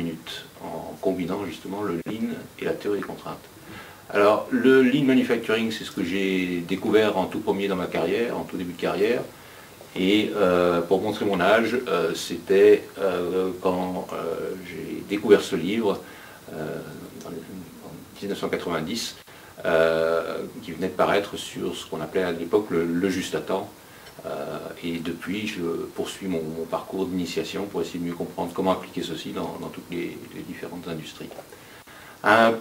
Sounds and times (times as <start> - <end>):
Speech: 0.0 - 3.5, 4.1 - 9.3, 9.9 - 31.5, 32.2 - 32.6.